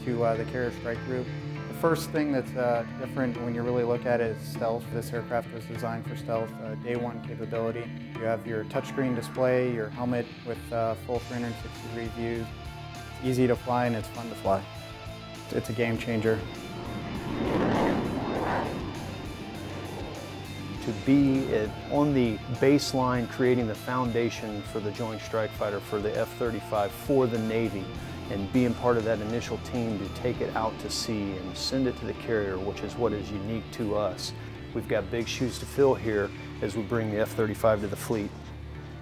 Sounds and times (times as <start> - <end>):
Speech: 0.0 - 12.5, 13.2 - 14.7, 15.5 - 16.4, 20.8 - 38.4
Music: 0.0 - 39.0.